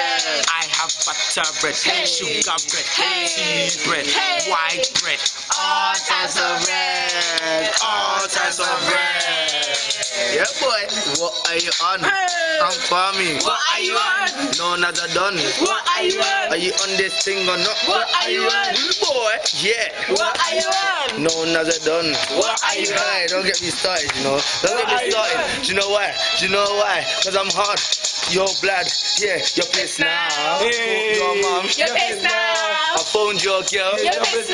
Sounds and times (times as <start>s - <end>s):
Male singing: 0.0s - 10.6s, 11.6s - 24.0s, 24.6s - 26.9s, 29.5s - 34.5s
Music: 0.0s - 34.5s.